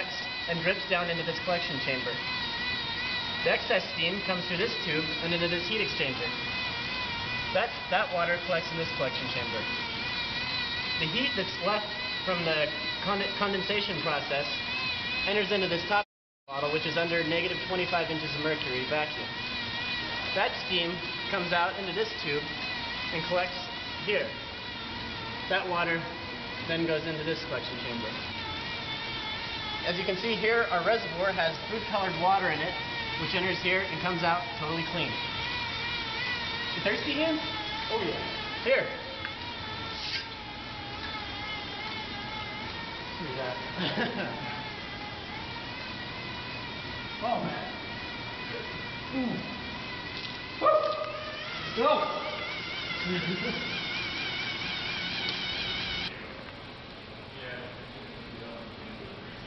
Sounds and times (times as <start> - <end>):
Inside, large room or hall: 0.0 - 59.4.